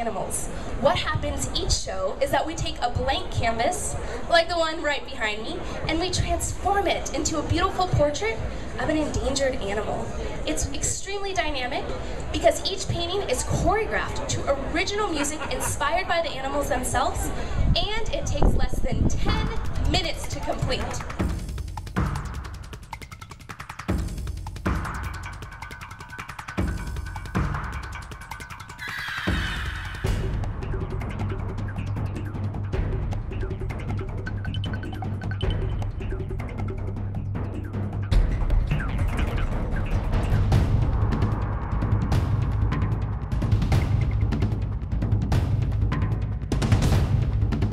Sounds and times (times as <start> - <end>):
Speech: 0.0 - 21.1
Music: 0.0 - 47.7.